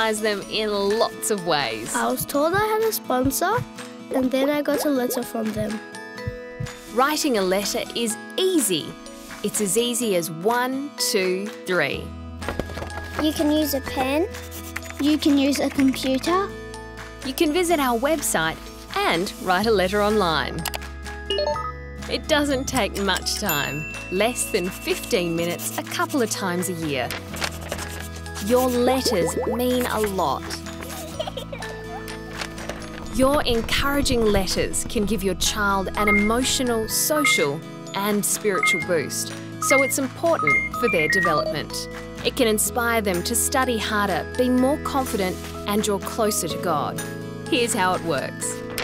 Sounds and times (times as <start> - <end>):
Speech: 0.0 - 5.8, 7.0 - 12.1, 13.2 - 14.3, 15.0 - 16.5, 17.3 - 20.6, 22.1 - 27.1, 28.4 - 30.6, 33.2 - 48.6
Music: 0.0 - 48.8
Writing: 13.2 - 16.2, 24.9 - 26.5, 27.3 - 32.2.